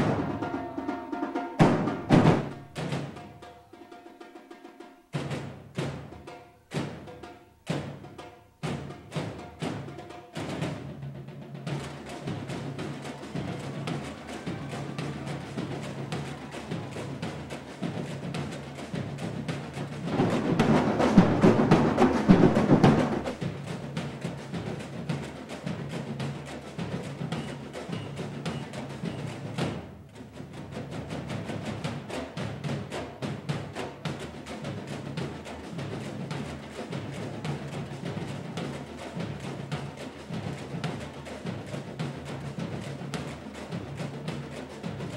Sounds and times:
Wood block: 11.7s - 29.8s.

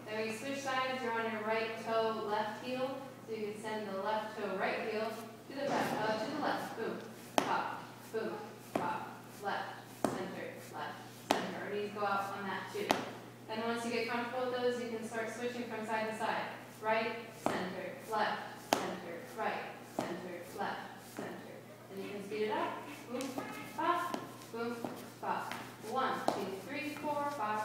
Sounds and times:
Speech: 0.1s - 27.6s.

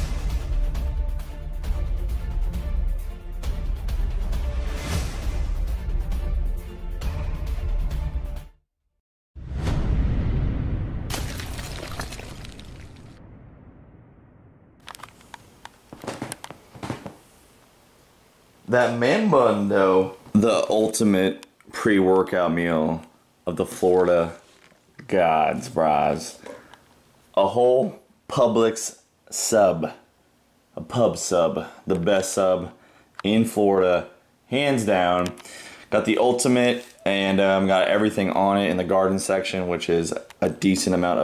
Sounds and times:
Speech: 18.7s - 24.4s, 25.0s - 26.6s, 27.4s - 30.1s, 30.8s - 41.2s.

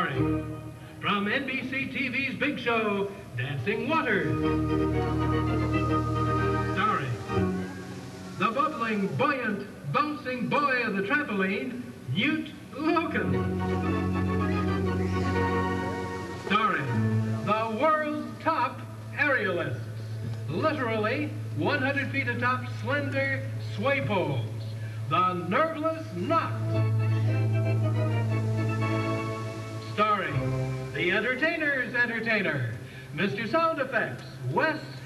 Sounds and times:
Music: 0.0s - 35.0s
Speech: 1.0s - 4.4s, 6.7s - 7.2s, 8.4s - 13.4s, 16.5s - 19.9s, 20.5s - 26.6s, 30.0s - 30.4s, 31.0s - 35.0s.

